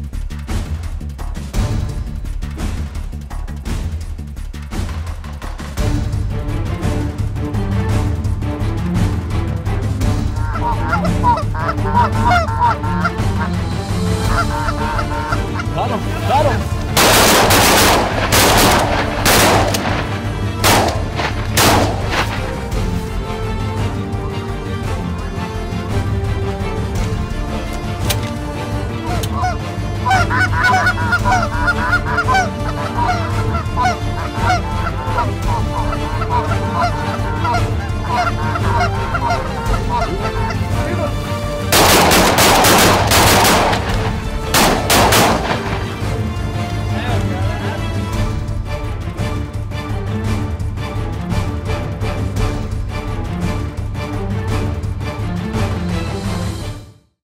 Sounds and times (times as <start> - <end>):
Music: 0.0 - 57.2
Honk: 10.4 - 13.5, 14.3 - 15.8, 29.0 - 40.7.